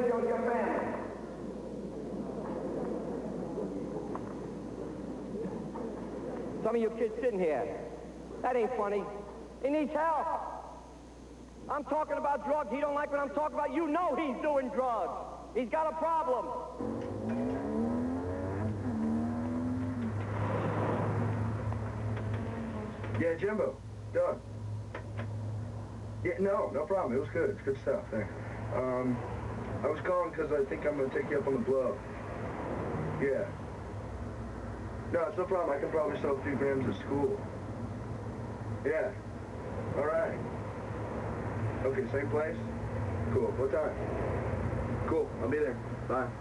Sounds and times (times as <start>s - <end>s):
Outside, urban or manmade: 15.4s - 46.4s.